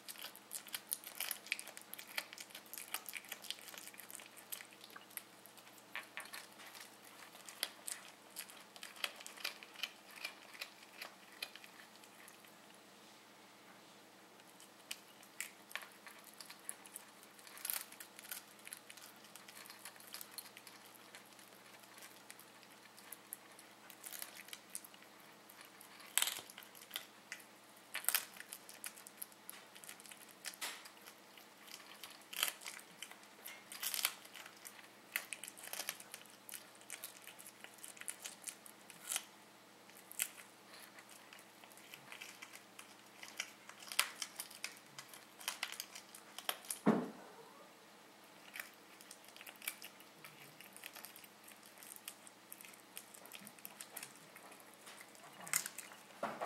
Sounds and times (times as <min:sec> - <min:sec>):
Cat: 0:00.0 - 0:12.6, 0:14.5 - 0:39.3, 0:39.9 - 0:47.8, 0:48.4 - 0:56.4.